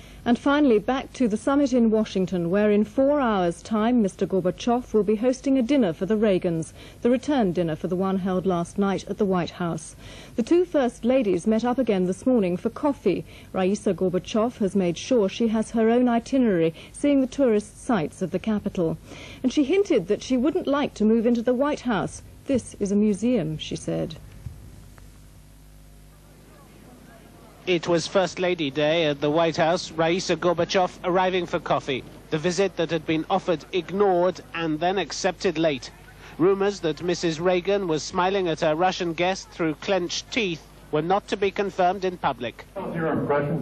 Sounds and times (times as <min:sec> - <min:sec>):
Speech: 0:00.3 - 0:24.2, 0:26.5 - 0:43.6.